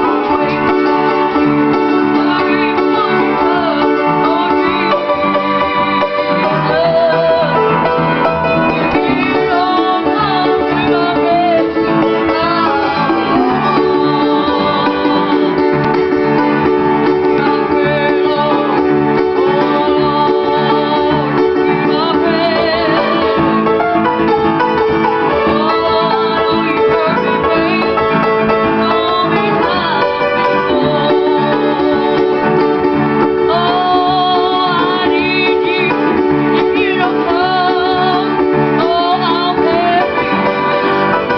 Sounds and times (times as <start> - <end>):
Music: 0.0 - 41.3.